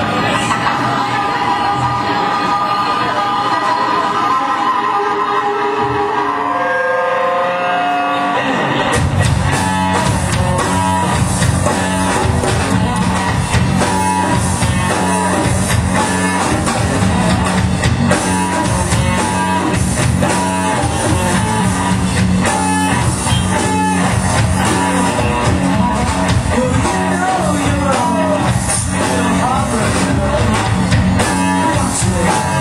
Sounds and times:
Guitar: 0.0 - 32.6
Rock music: 0.0 - 32.6
Drum kit: 8.4 - 32.6
Drum: 8.9 - 32.6.

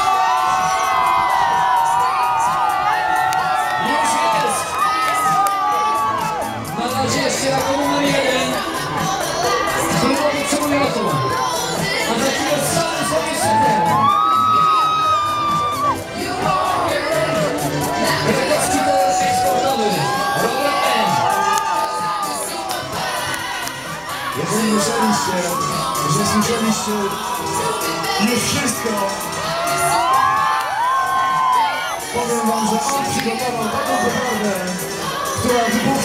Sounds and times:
Music: 0.0 - 36.0
Speech: 24.4 - 27.2, 32.2 - 34.8.

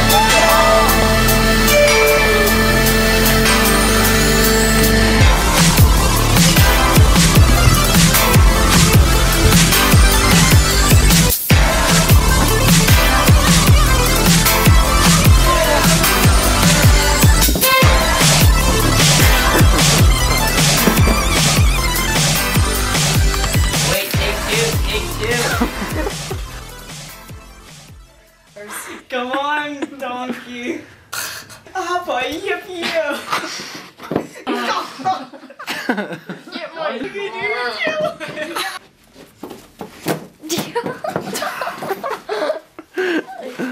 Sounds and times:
Music: 0.0 - 28.9
Speech: 31.8 - 33.3, 36.5 - 38.8.

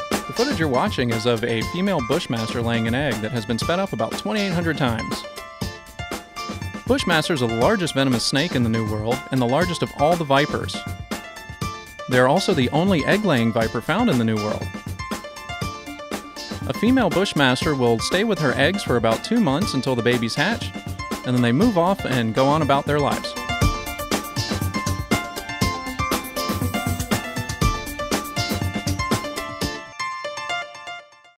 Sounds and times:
Music: 0.0 - 31.3.

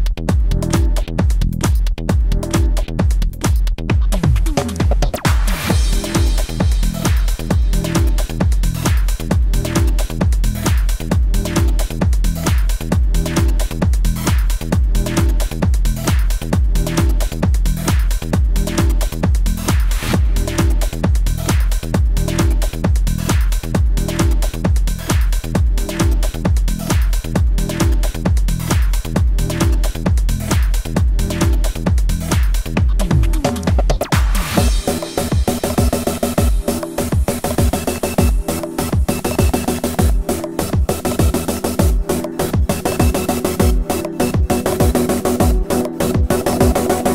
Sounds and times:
Music: 0.0 - 47.1.

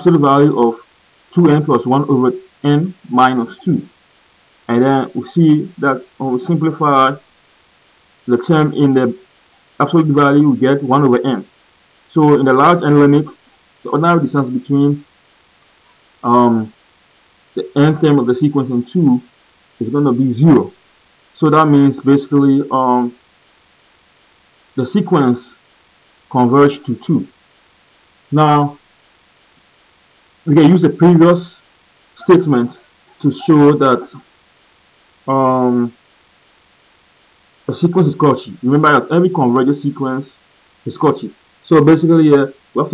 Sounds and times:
Narration, monologue: 0.0 - 42.9.

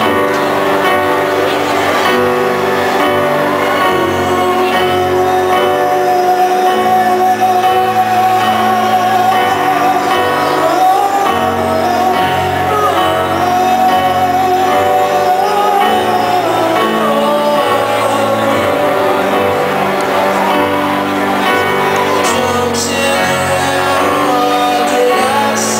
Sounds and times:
Crowd: 0.0 - 25.8
Music: 0.0 - 25.8.

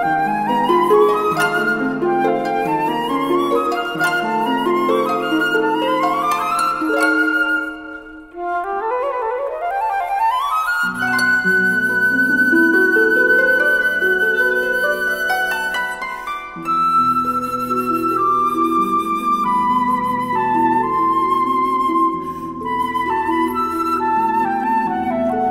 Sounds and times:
Classical music: 0.0 - 25.5
Flute: 0.0 - 25.5
Plucked string instrument: 0.0 - 25.5.

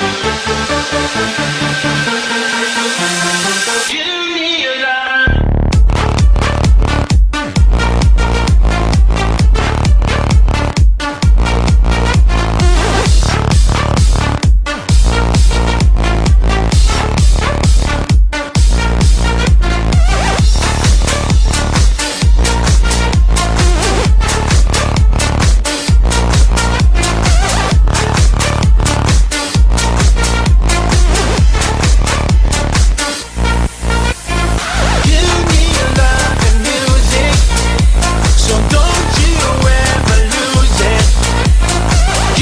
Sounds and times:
Music: 0.0 - 42.4.

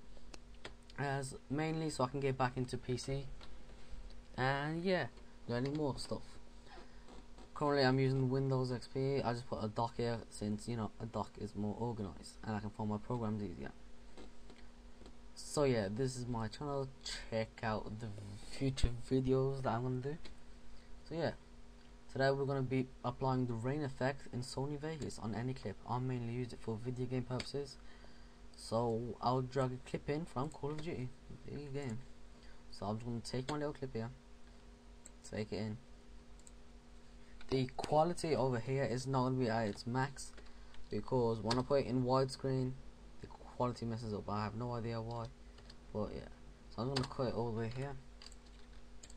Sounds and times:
Speech: 0.9 - 3.4, 4.4 - 6.4, 7.6 - 13.8, 15.4 - 20.3, 21.0 - 21.4, 22.1 - 27.8, 28.6 - 32.1, 32.7 - 34.2, 35.2 - 35.8, 37.5 - 48.1.

